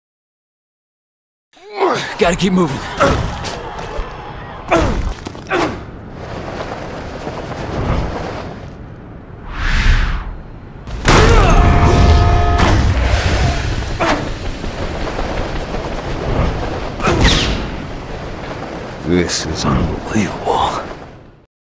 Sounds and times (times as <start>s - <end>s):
Speech: 1.6s - 3.2s, 19.0s - 20.9s.